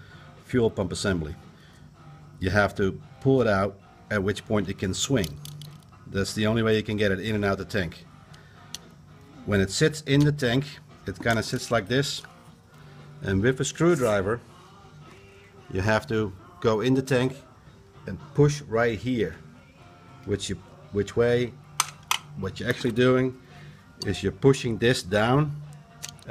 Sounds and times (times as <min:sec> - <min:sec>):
Music: 0:00.0 - 0:26.3
Speech: 0:00.5 - 0:01.4, 0:02.4 - 0:05.4, 0:06.1 - 0:08.0, 0:09.5 - 0:12.3, 0:13.2 - 0:14.4, 0:15.7 - 0:17.4, 0:18.1 - 0:19.4, 0:20.3 - 0:21.6, 0:22.4 - 0:23.4, 0:24.0 - 0:25.6.